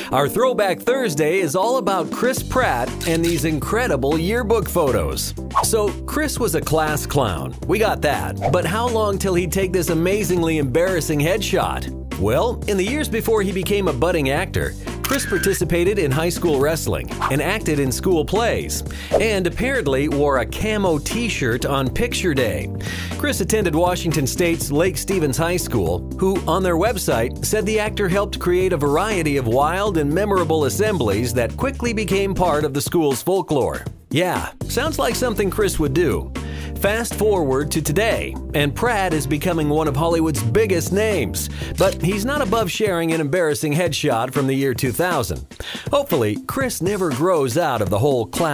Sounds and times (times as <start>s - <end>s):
Music: 0.0s - 48.5s
Speech: 0.1s - 48.5s.